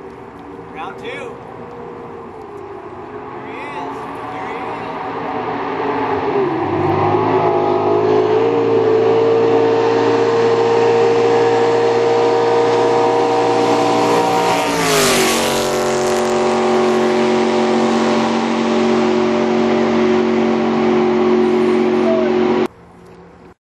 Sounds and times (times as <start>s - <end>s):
Motorboat, speedboat: 0.0s - 23.6s.